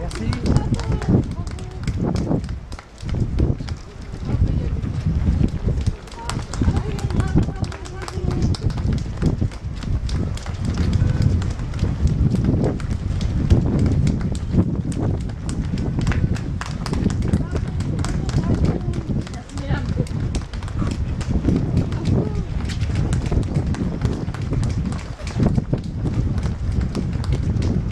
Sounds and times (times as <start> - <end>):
Speech: 0.0 - 2.0, 3.9 - 5.0, 5.7 - 8.9, 17.3 - 21.0, 21.8 - 22.7
Run: 0.0 - 27.9.